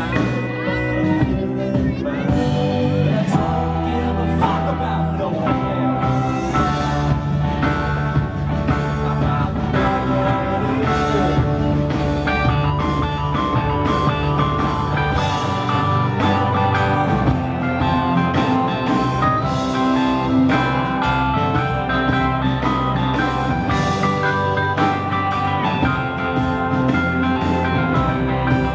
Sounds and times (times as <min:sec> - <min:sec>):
Singing: 0:00.0 - 0:12.2
Rock and roll: 0:00.0 - 0:28.7.